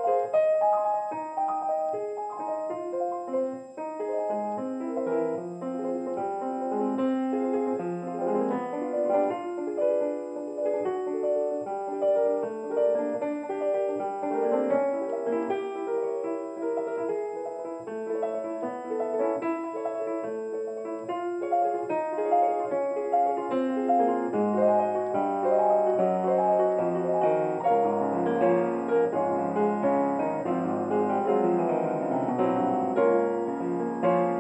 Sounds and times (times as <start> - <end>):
Music: 0.0 - 34.4.